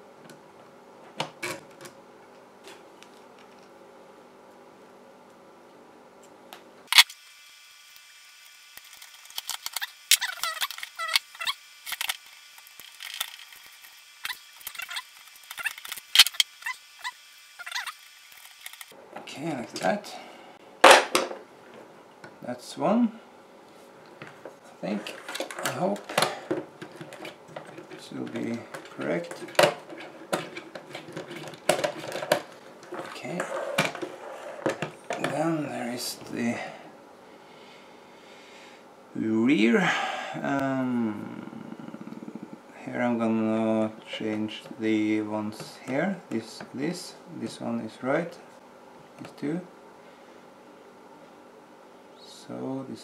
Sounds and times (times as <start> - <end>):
Electric toothbrush: 7.0 - 19.0.